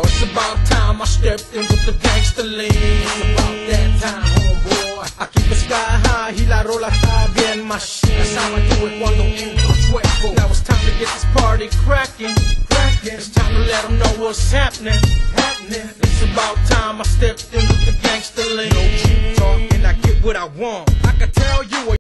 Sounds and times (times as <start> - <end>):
Music: 0.0 - 22.0.